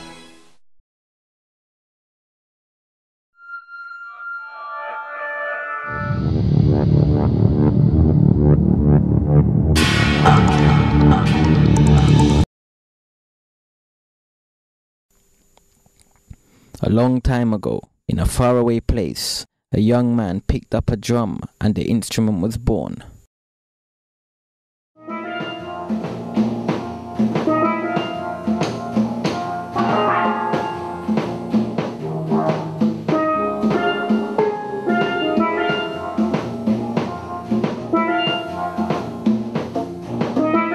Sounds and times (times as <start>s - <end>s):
Drum: 9.7s - 12.5s, 25.4s - 40.6s.